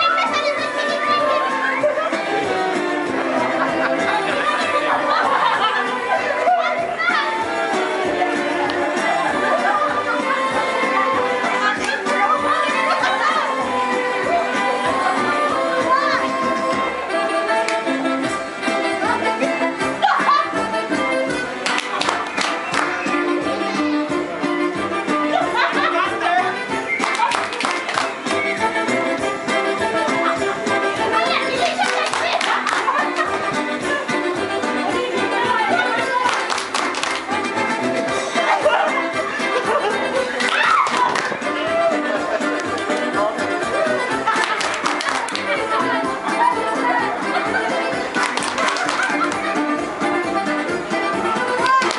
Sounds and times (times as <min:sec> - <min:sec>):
Speech: 0:00.0 - 0:02.0, 0:09.0 - 0:12.8, 0:31.0 - 0:32.6, 0:34.7 - 0:36.5, 0:45.3 - 0:48.2
Music: 0:00.0 - 0:51.9.